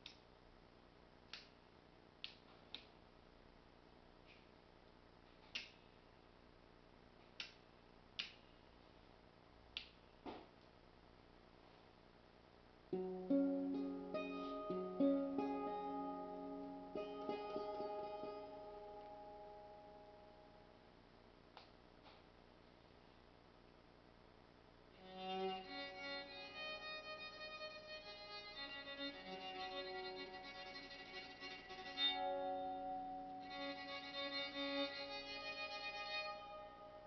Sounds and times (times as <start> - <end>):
Musical instrument: 13.0 - 20.3.